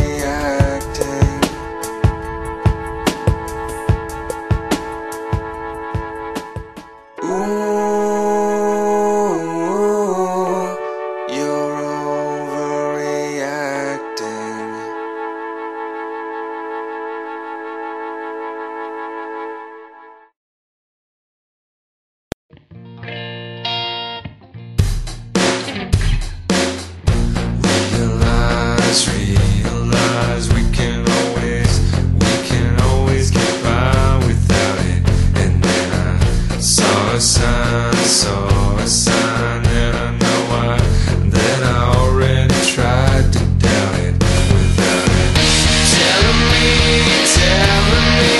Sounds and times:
Music: 0.0 - 20.4, 22.5 - 48.3.

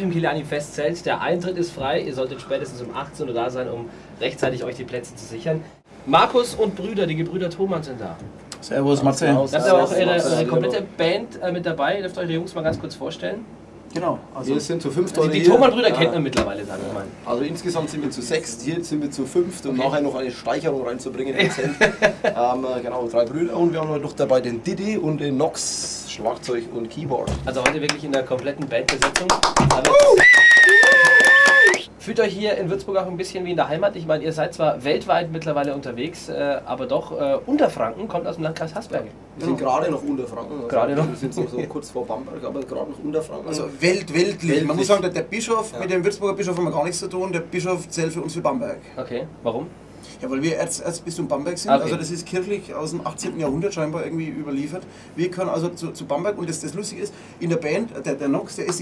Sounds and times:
Speech: 0.0 - 21.6, 22.3 - 30.0, 32.0 - 58.8.

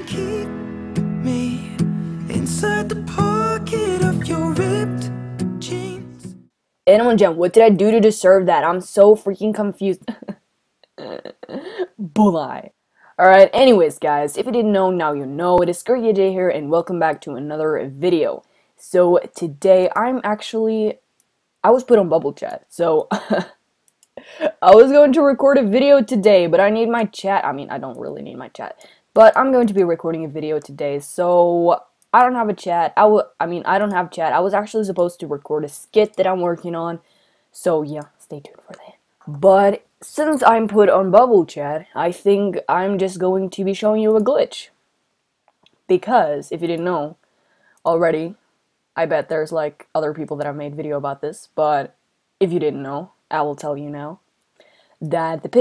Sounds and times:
Speech: 6.9 - 10.4, 11.0 - 21.0, 21.7 - 23.6, 24.4 - 37.0, 37.6 - 44.8, 45.9 - 47.2, 47.9 - 48.4, 49.0 - 54.2, 55.0 - 55.6.

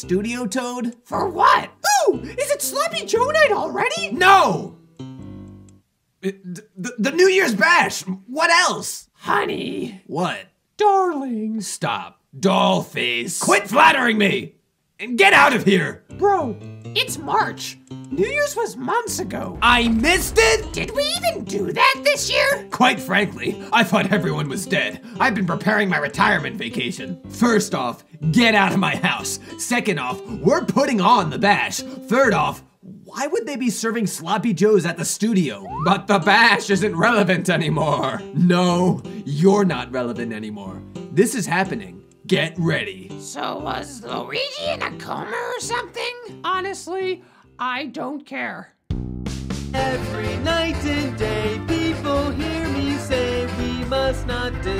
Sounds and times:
Music for children: 2.1 - 5.8, 15.7 - 18.5, 21.4 - 32.5, 35.5 - 46.7, 49.2 - 54.7.

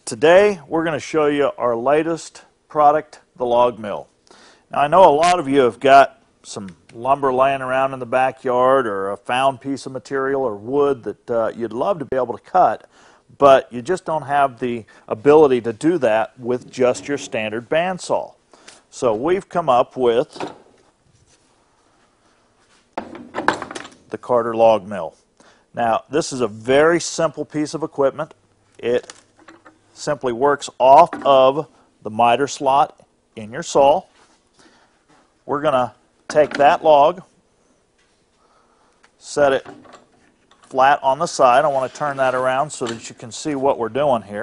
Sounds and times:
Speech: 0.0 - 4.1, 4.7 - 20.4, 24.1 - 25.2, 25.8 - 29.1, 30.0 - 34.1, 35.5 - 37.3, 39.2 - 39.7, 40.7 - 44.4.

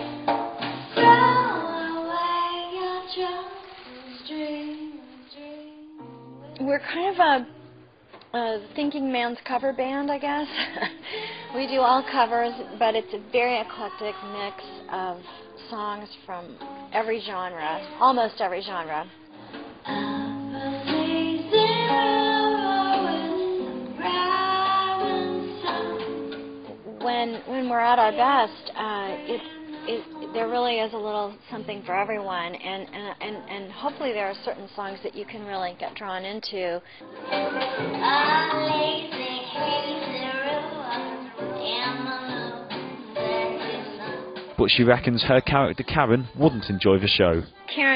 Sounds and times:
Music: 0.0 - 36.1, 36.8 - 47.9.

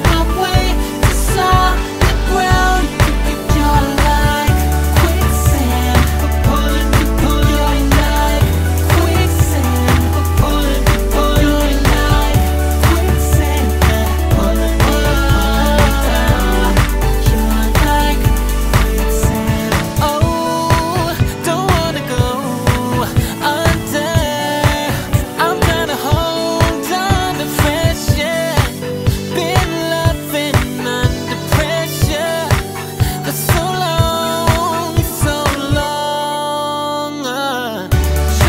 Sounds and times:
Pop music: 0.0 - 38.4
Singing: 0.0 - 38.4.

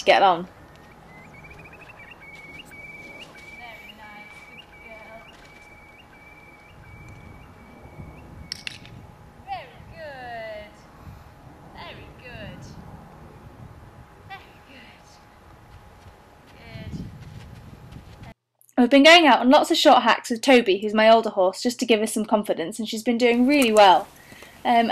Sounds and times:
Speech: 16.5 - 17.0, 24.7 - 24.9.

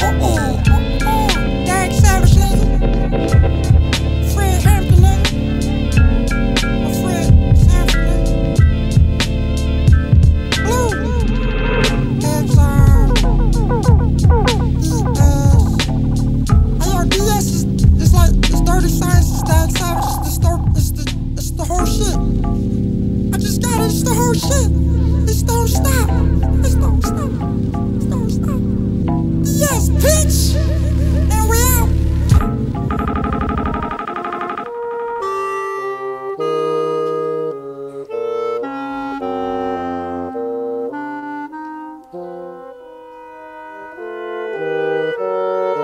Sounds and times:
Saxophone: 0.0 - 28.8, 29.5 - 45.8
Clarinet: 10.1 - 16.1, 33.9 - 45.8.

